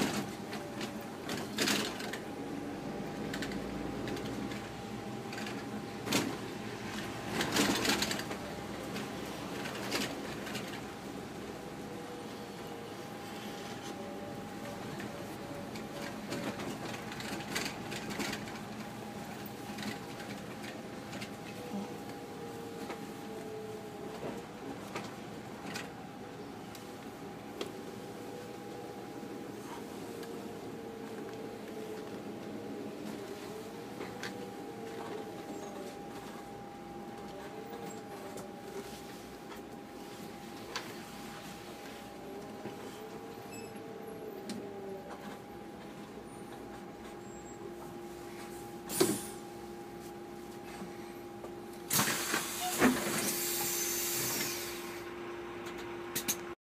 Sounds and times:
Motor vehicle (road): 0.0s - 56.6s.

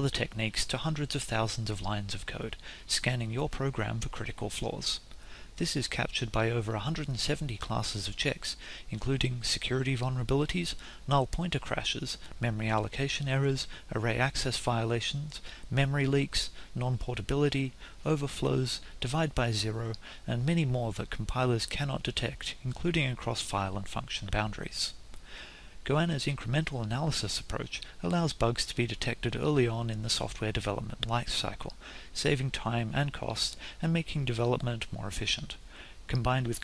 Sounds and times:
Speech: 0.0s - 5.0s, 5.6s - 25.0s, 25.8s - 36.6s.

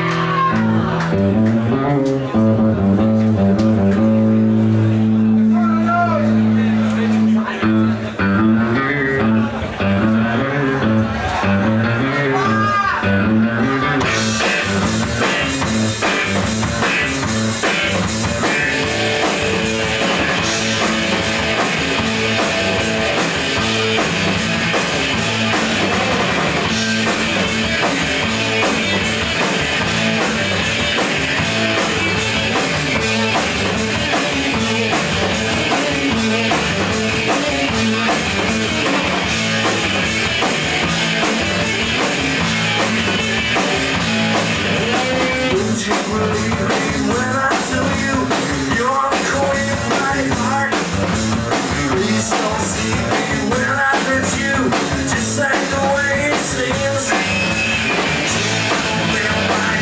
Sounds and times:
Music: 0.0s - 59.8s
Speech: 5.0s - 14.1s.

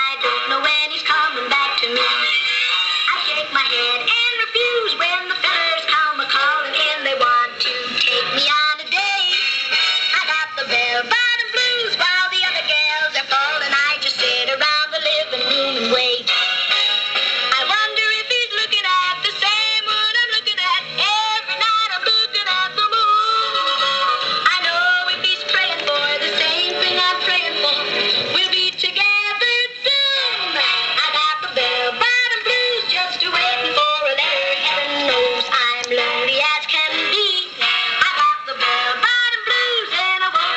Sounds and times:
Synthetic singing: 0.0s - 9.4s, 10.1s - 16.3s, 17.5s - 40.5s
Music: 0.0s - 40.5s.

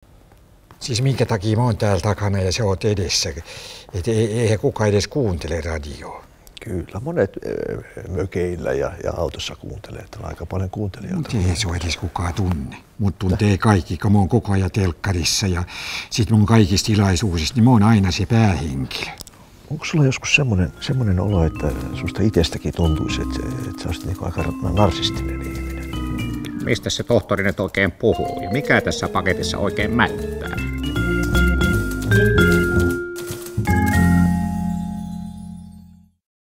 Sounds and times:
Speech: 0.8s - 26.0s, 26.6s - 30.6s
Music: 20.2s - 36.2s.

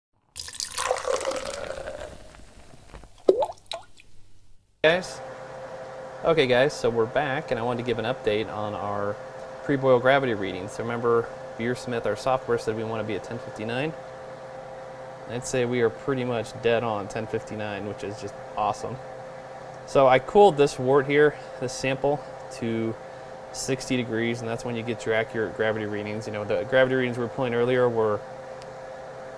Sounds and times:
Speech: 4.8s - 5.2s, 6.2s - 14.0s, 15.3s - 19.0s, 19.9s - 23.0s, 23.6s - 28.2s.

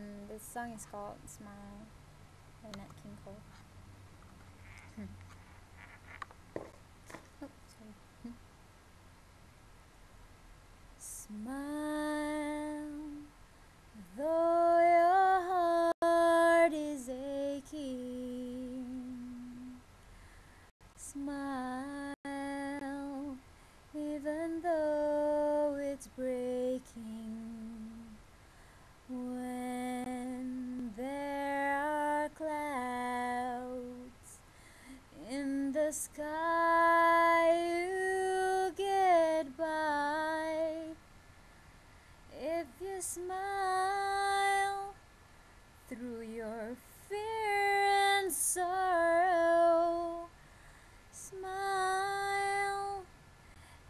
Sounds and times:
Female singing: 0.0s - 1.9s, 11.0s - 13.3s, 14.0s - 19.8s, 21.0s - 23.4s, 24.0s - 28.2s, 29.1s - 34.4s, 35.1s - 41.0s, 42.3s - 45.0s, 45.9s - 50.3s, 51.2s - 53.1s.

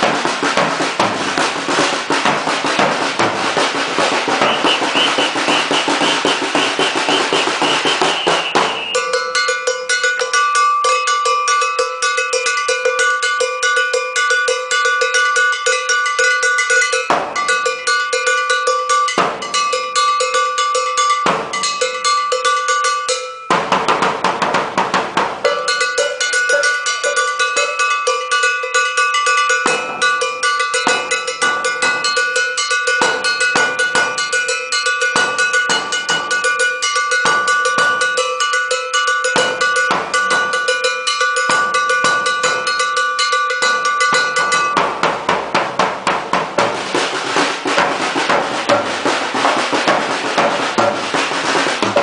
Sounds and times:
Drum: 0.0s - 10.4s, 15.5s - 19.8s, 21.2s - 21.8s, 23.5s - 38.5s, 39.2s - 52.0s
Drum kit: 0.0s - 10.4s, 16.1s - 19.8s, 21.2s - 22.0s, 23.5s - 38.4s, 39.3s - 52.0s.

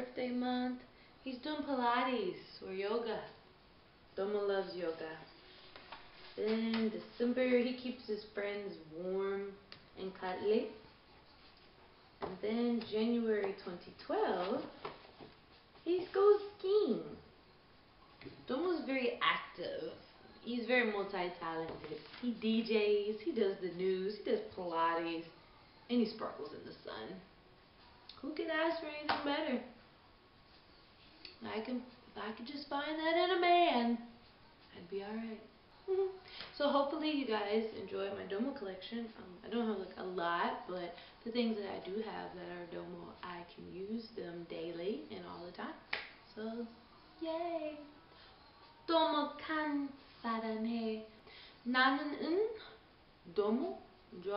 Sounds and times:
Speech: 0.0s - 3.4s, 4.2s - 5.3s, 6.4s - 10.8s, 12.2s - 14.8s, 15.8s - 17.2s, 18.4s - 27.3s, 28.1s - 29.8s, 31.4s - 34.1s, 34.7s - 47.9s, 51.7s - 54.3s.

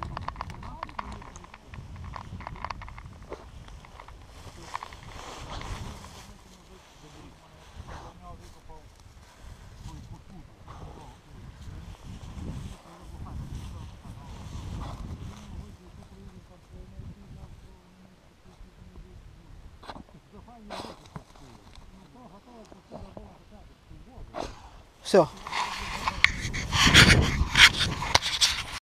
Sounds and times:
Speech: 0.0s - 1.9s, 5.8s - 8.9s, 12.7s - 19.6s, 20.2s - 24.4s, 25.0s - 26.3s.

